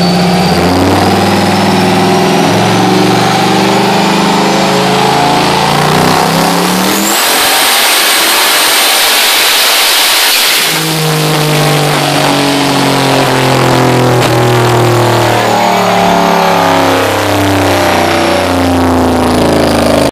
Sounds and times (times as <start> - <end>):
Vehicle: 0.0 - 20.1.